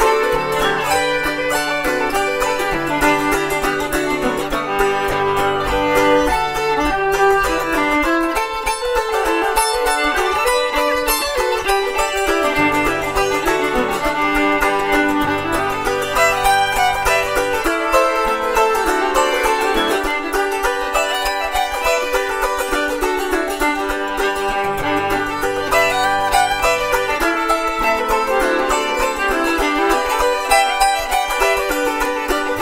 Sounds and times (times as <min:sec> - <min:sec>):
Banjo: 0:00.0 - 0:32.6
Bluegrass: 0:00.0 - 0:32.6
Mandolin: 0:00.0 - 0:32.6
Violin, fiddle: 0:00.0 - 0:32.6.